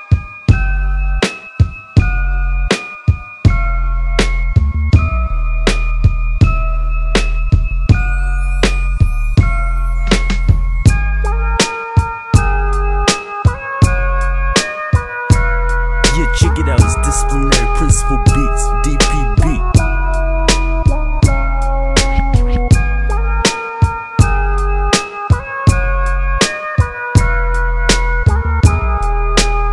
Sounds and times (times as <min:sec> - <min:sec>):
Music: 0:00.0 - 0:29.7.